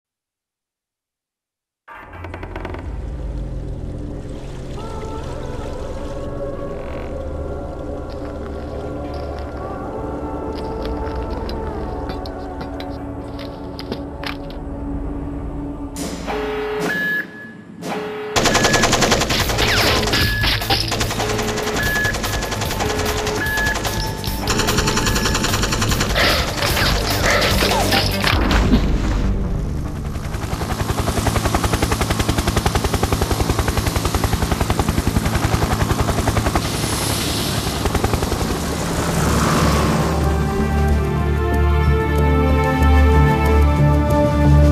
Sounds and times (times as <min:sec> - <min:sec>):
Music: 0:01.9 - 0:17.8, 0:18.4 - 0:37.0, 0:39.5 - 0:44.7.